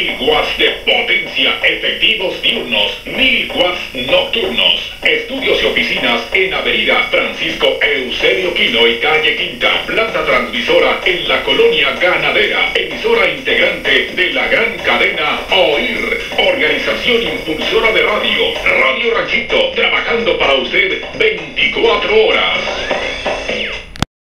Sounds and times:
Speech: 0.0s - 23.9s
Radio: 0.0s - 24.1s.

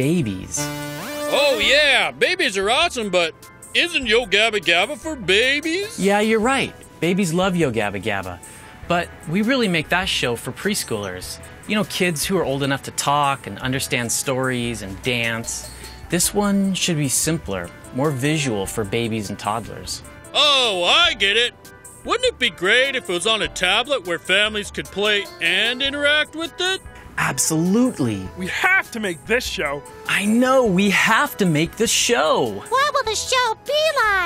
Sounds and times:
Music: 0.0s - 34.2s
Speech: 1.3s - 21.5s, 22.1s - 34.2s.

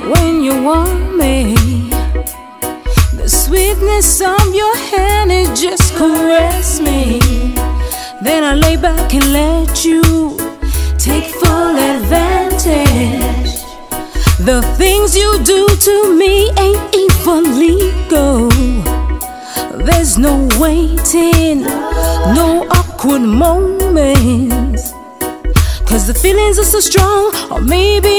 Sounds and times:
Pop music: 0.0s - 28.1s.

